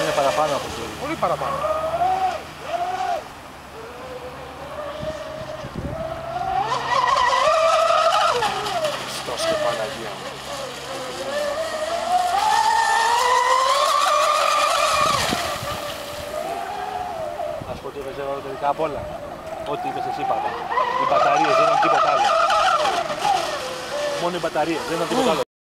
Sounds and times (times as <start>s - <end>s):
Stream: 0.0s - 25.5s
Speech: 24.2s - 25.4s.